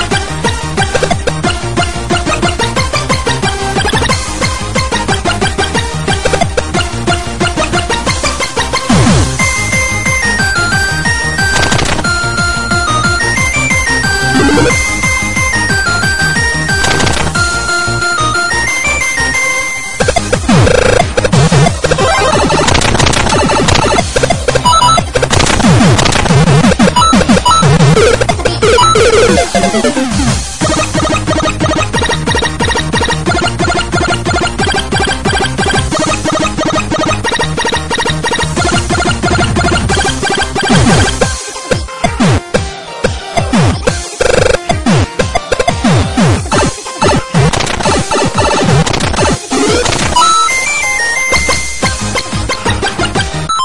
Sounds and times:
Techno: 0.0 - 42.7, 43.4 - 53.6.

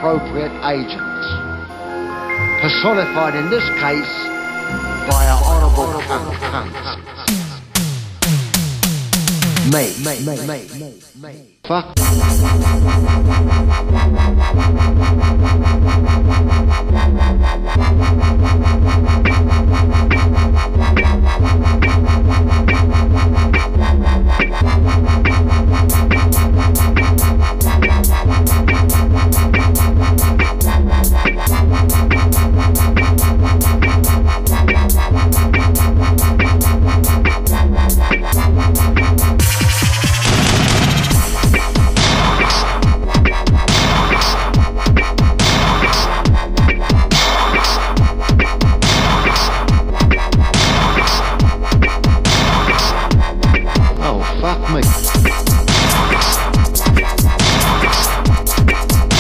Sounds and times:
Dubstep: 5.1 - 11.2, 12.0 - 59.2.

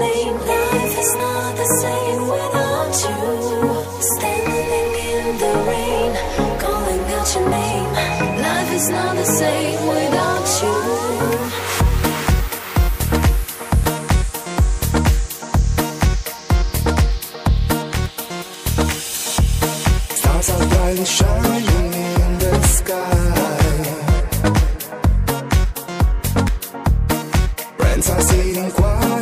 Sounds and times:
Music: 0.0 - 29.2.

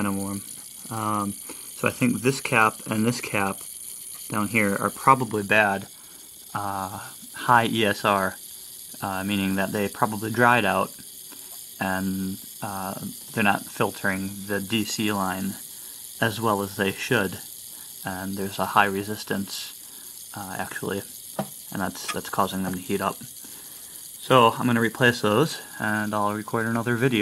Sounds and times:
Speech: 0.0 - 3.6, 4.3 - 5.9, 6.6 - 8.4, 9.0 - 11.0, 11.8 - 15.6, 16.2 - 17.4, 18.1 - 19.7, 20.4 - 21.1, 21.7 - 23.3, 24.2 - 27.2.

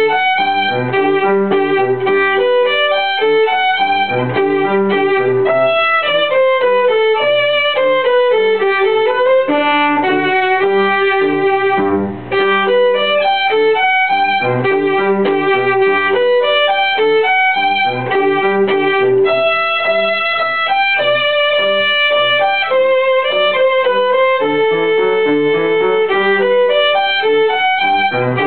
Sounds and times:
Violin, fiddle: 0.0 - 28.4.

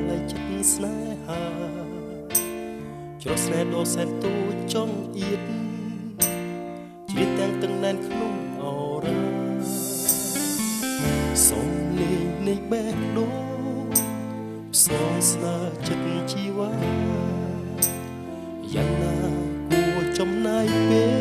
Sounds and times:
Music: 0.0 - 21.2.

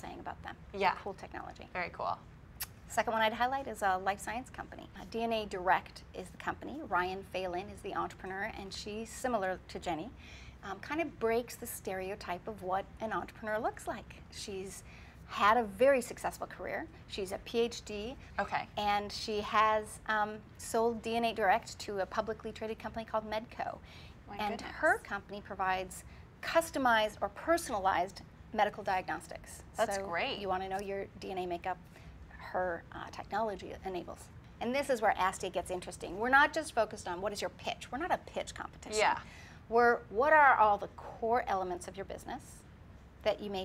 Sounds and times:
Female speech, woman speaking: 0.0 - 2.3, 2.9 - 31.8, 32.4 - 42.6, 43.3 - 43.6.

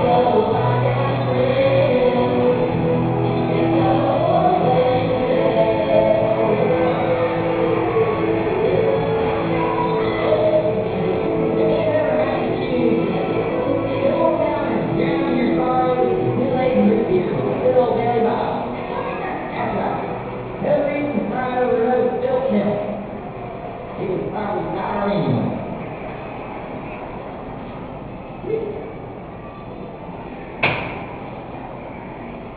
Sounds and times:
Music: 0.0 - 24.0
Speech: 11.6 - 23.0.

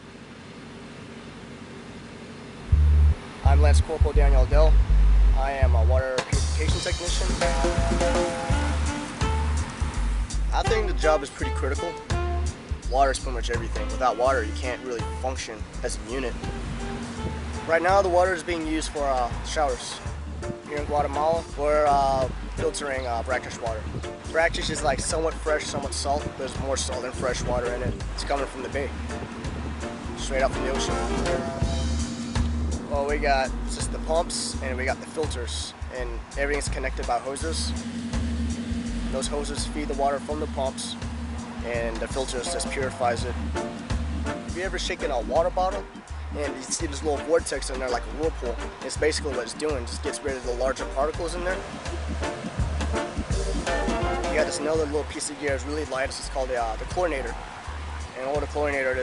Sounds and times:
Music: 2.7 - 59.0
Speech: 3.4 - 4.8, 5.4 - 8.8, 10.5 - 12.0, 12.9 - 16.4, 17.7 - 20.0, 20.6 - 28.9, 30.2 - 31.8, 32.9 - 37.8, 39.2 - 41.0, 41.6 - 43.4, 44.5 - 51.6, 53.5 - 57.4, 58.2 - 59.0.

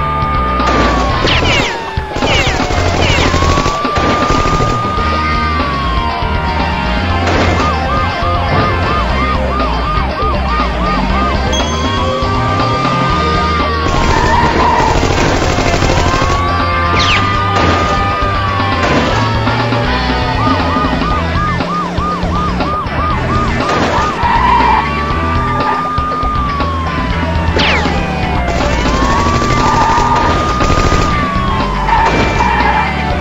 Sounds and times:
Music: 0.0 - 33.2
Police car (siren): 0.0 - 33.2
Car: 4.2 - 15.4, 16.2 - 28.8, 29.4 - 33.2.

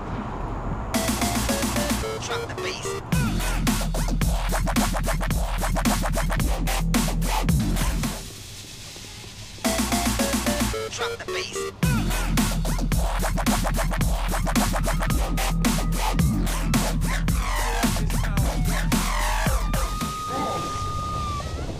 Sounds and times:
Dubstep: 1.0 - 20.3
Speech: 2.2 - 3.0, 10.9 - 11.7, 17.8 - 18.8.

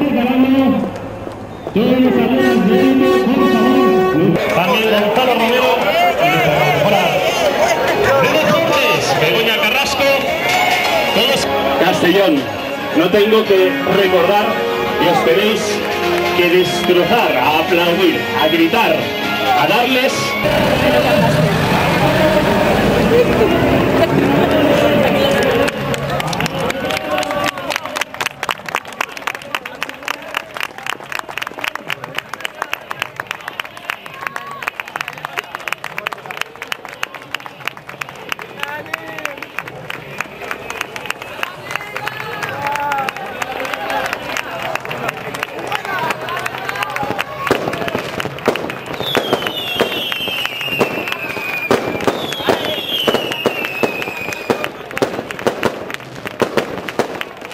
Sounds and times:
Crowd: 0.0 - 57.5
Outside, urban or manmade: 0.0 - 57.5.

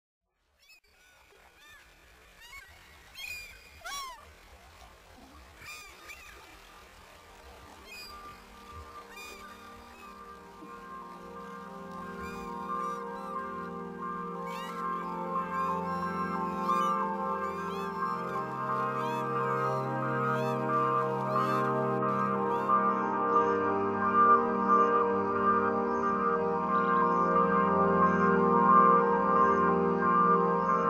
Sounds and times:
Outside, rural or natural: 0.3 - 30.8
Goose: 0.6 - 6.5, 7.8 - 22.8.

